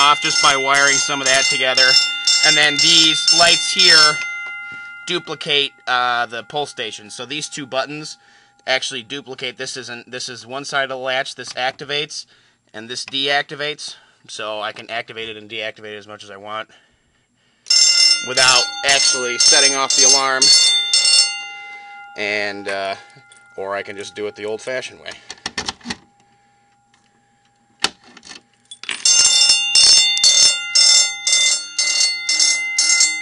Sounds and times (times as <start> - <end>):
Fire alarm: 0.0 - 9.2, 17.7 - 27.8, 28.4 - 33.2
Speech: 5.1 - 16.8, 18.2 - 20.5, 22.2 - 23.0, 23.6 - 25.2.